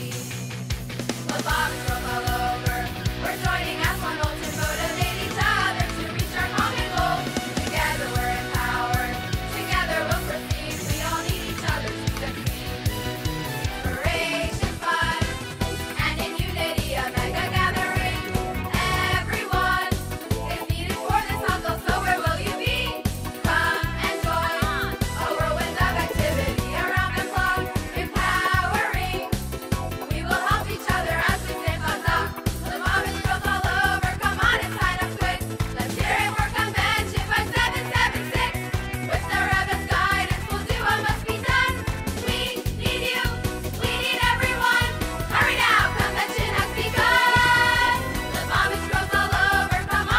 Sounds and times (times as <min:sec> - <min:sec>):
Exciting music: 0:00.0 - 0:50.1.